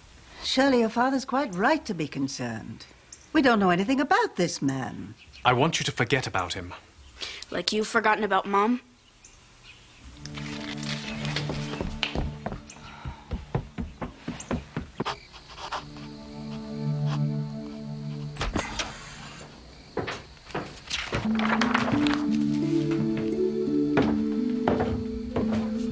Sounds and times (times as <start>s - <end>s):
Music: 10.1s - 13.8s, 15.7s - 18.9s, 21.2s - 25.9s.